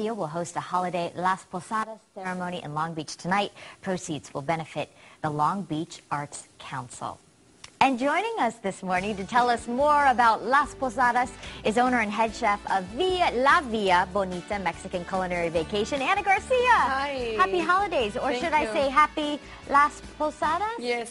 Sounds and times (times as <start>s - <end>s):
Music: 9.0s - 21.1s.